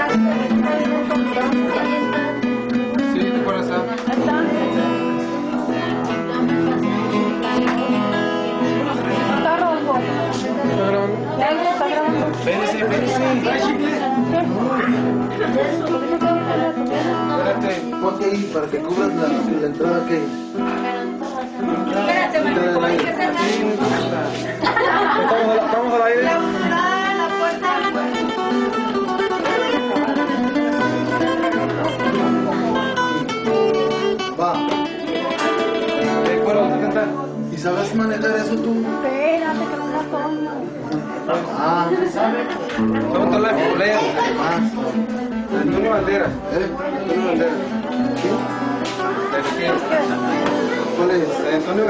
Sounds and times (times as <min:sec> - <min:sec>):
Acoustic guitar: 0:00.0 - 0:51.9
Speech: 0:08.6 - 0:28.6.